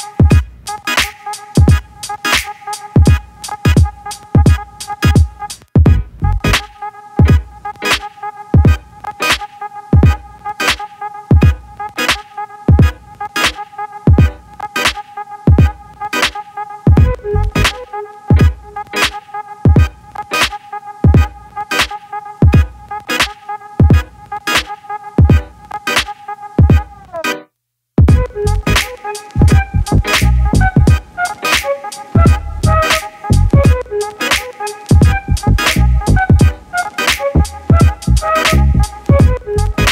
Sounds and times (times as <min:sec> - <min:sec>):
Music: 0:00.0 - 0:39.9.